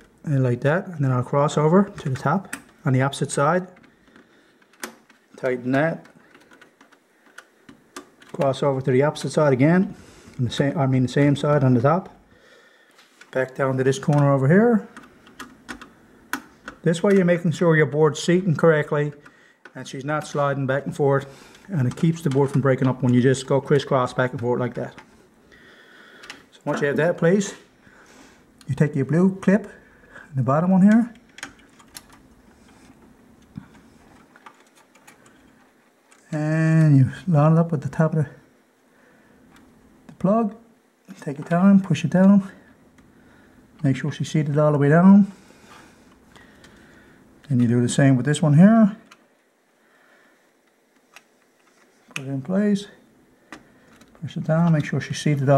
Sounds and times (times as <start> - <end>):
Speech: 0.2 - 3.8, 5.4 - 6.1, 8.3 - 12.2, 13.3 - 14.9, 16.8 - 25.0, 26.5 - 27.6, 28.6 - 31.2, 36.3 - 38.4, 40.1 - 42.6, 43.8 - 45.4, 47.5 - 49.1, 52.2 - 53.0, 54.2 - 55.5.